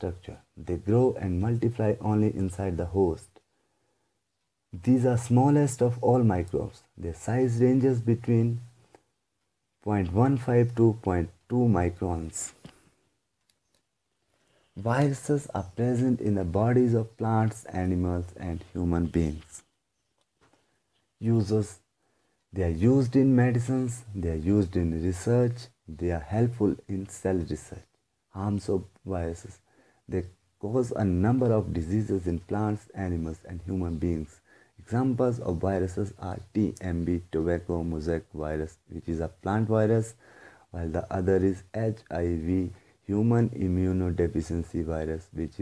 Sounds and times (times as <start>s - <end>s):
Speech: 0.0s - 3.4s, 4.7s - 8.8s, 9.8s - 12.8s, 14.8s - 19.7s, 21.2s - 21.9s, 22.5s - 45.6s.